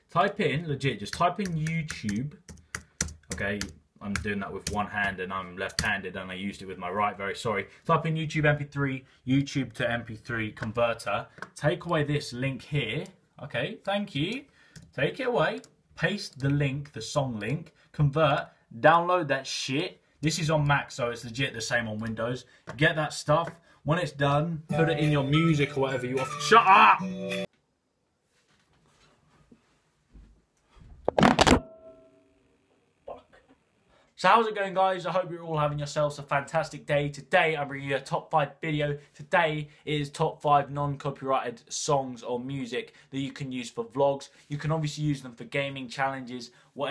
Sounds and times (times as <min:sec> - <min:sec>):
Speech: 0:00.1 - 0:02.4, 0:03.3 - 0:27.1, 0:33.1 - 0:33.4, 0:34.2 - 0:46.9
Music: 0:24.7 - 0:27.5.